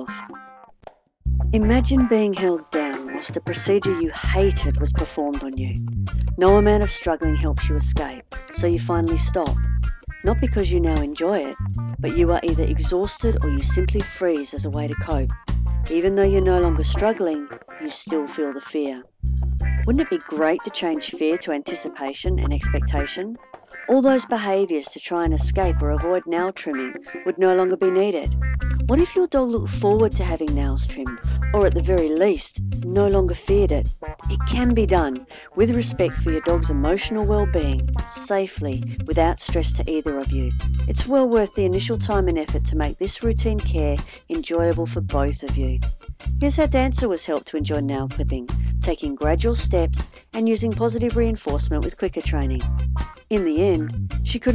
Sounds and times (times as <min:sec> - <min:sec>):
Speech: 0:00.0 - 0:00.2, 0:01.6 - 0:05.8, 0:06.4 - 0:09.6, 0:10.2 - 0:15.3, 0:15.9 - 0:19.1, 0:19.9 - 0:45.8, 0:46.4 - 0:52.6, 0:53.3 - 0:54.5
Music: 0:00.0 - 0:54.5.